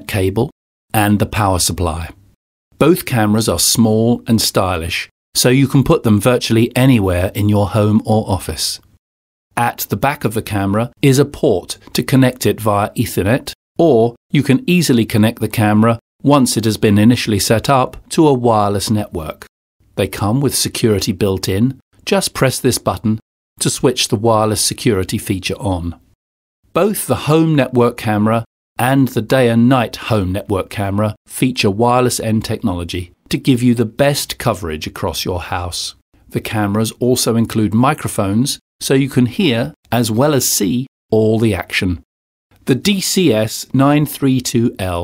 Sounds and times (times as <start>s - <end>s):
Speech: 0.0s - 2.2s, 2.8s - 8.9s, 9.6s - 26.1s, 26.7s - 45.0s.